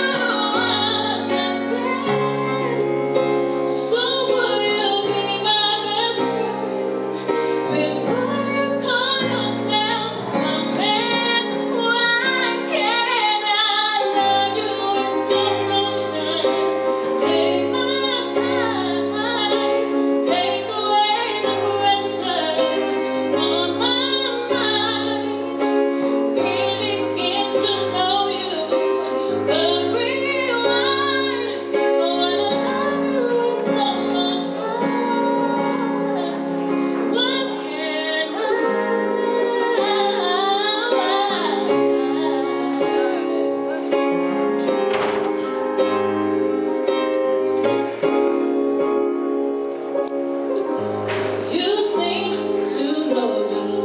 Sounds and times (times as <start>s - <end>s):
Female singing: 0.0s - 6.9s, 7.6s - 25.7s, 26.3s - 43.8s, 51.5s - 53.8s
Music: 0.0s - 53.8s.